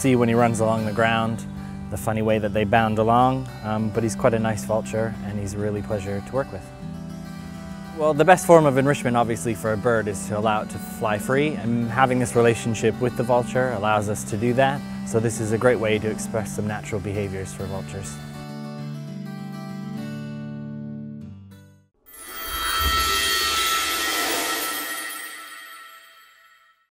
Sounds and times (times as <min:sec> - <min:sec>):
Speech: 0:00.0 - 0:06.6, 0:08.0 - 0:18.2
Music: 0:00.0 - 0:26.9.